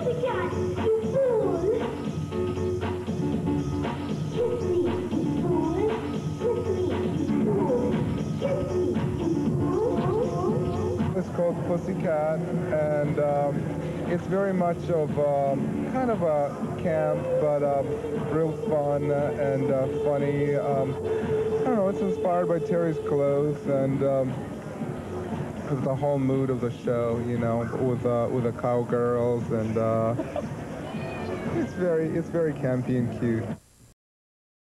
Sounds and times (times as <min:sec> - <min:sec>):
Speech: 0:09.7 - 0:24.5, 0:25.3 - 0:30.2, 0:30.9 - 0:33.6
Meow: 0:30.9 - 0:31.9.